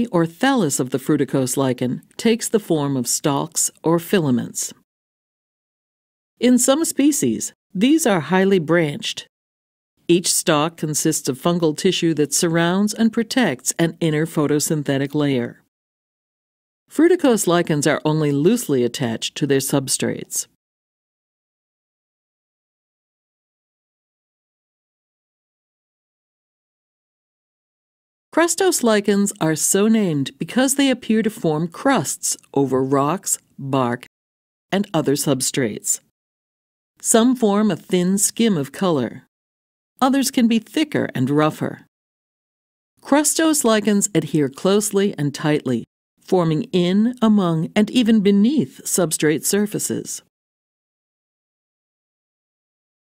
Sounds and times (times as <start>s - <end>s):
Speech: 0.0s - 4.8s, 6.4s - 9.3s, 10.1s - 15.7s, 16.9s - 20.6s, 28.4s - 34.1s, 34.8s - 36.1s, 37.0s - 39.3s, 40.0s - 41.9s, 43.0s - 50.3s.